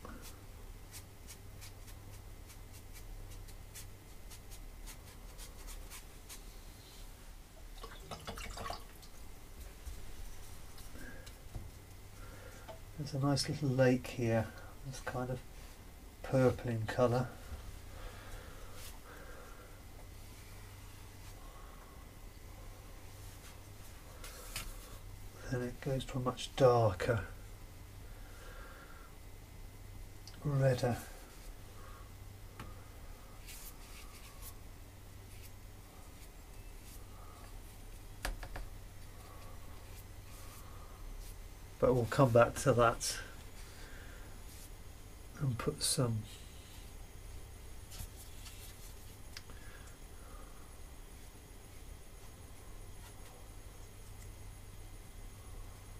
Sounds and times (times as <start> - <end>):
Inside, small room: 0.0 - 55.9
Speech: 13.0 - 15.4, 16.2 - 17.4, 25.4 - 27.4, 30.3 - 31.2, 41.8 - 43.4, 45.4 - 46.3.